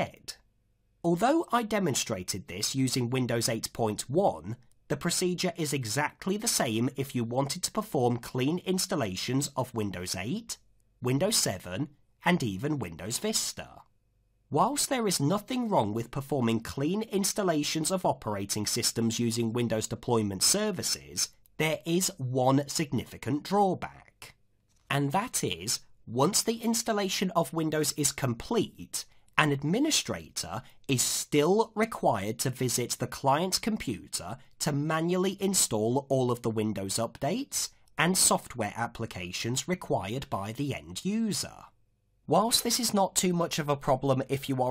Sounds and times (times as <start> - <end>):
Narration, monologue: 0.0 - 44.7.